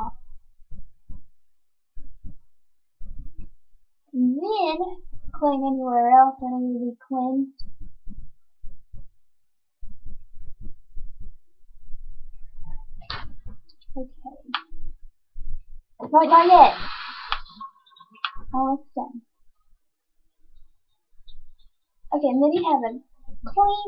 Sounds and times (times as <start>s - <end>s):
Inside, small room: 0.0s - 23.8s
Speech: 4.2s - 7.6s, 16.0s - 19.2s, 22.1s - 23.8s.